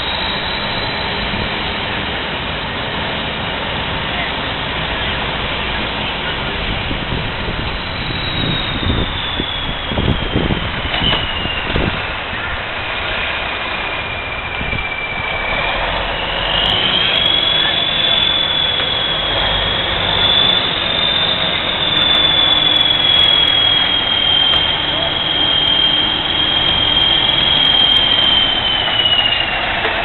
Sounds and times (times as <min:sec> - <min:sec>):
Outside, urban or manmade: 0:00.0 - 0:30.0
Vehicle: 0:00.0 - 0:30.0.